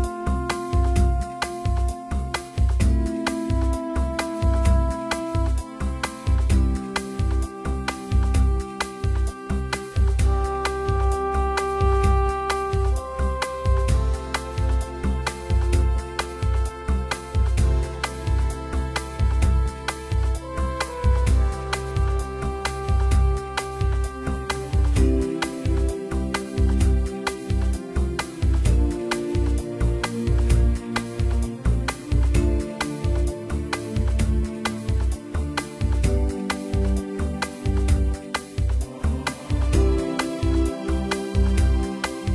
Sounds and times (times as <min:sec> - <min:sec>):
Music: 0:00.0 - 0:42.3.